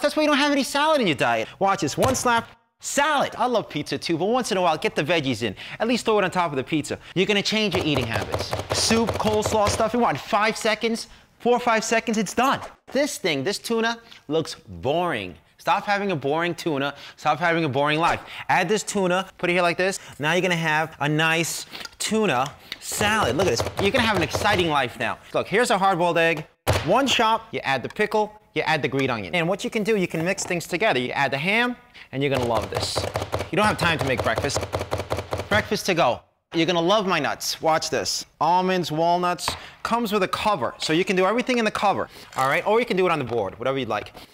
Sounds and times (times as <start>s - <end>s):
Speech: 0.0s - 34.6s, 35.5s - 44.2s.